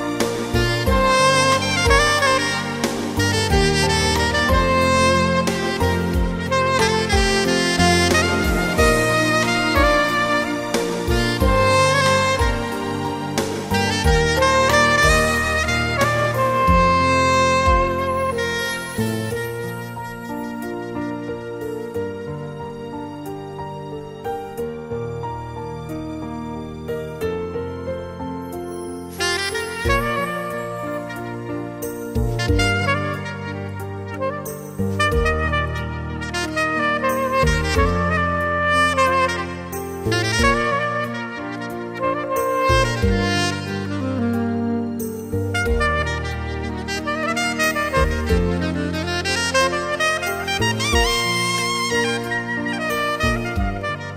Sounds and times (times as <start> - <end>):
Saxophone: 0.0 - 24.8, 27.2 - 54.1.